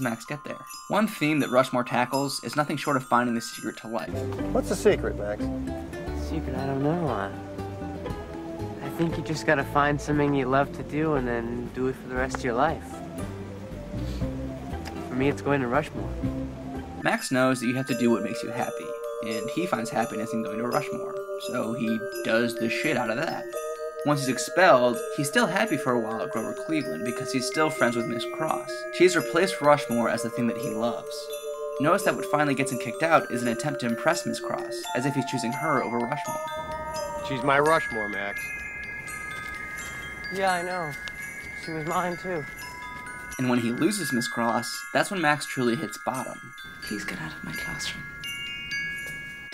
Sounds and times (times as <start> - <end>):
Speech: 0.0 - 5.4, 6.2 - 7.3, 8.8 - 12.9, 15.1 - 16.0, 17.0 - 23.4, 24.1 - 36.3, 37.3 - 38.4, 41.7 - 42.4, 43.4 - 48.0
Music: 0.0 - 49.5.